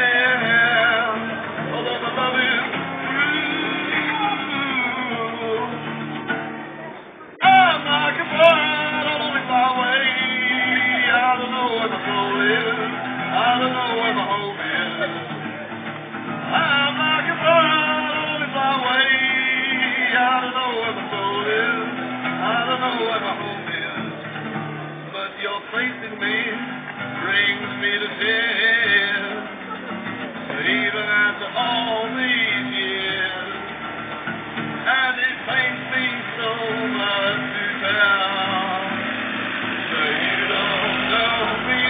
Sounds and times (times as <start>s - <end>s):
Acoustic guitar: 0.0s - 41.9s
Electric guitar: 0.0s - 41.9s.